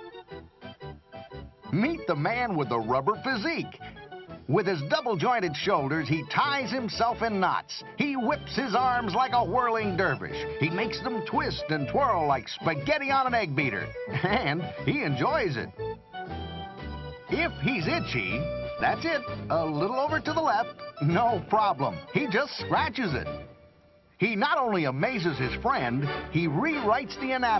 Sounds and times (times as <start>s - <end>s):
Music: 0.0s - 27.5s
Speech: 1.7s - 3.8s, 4.5s - 15.7s, 17.3s - 23.3s, 24.2s - 27.5s.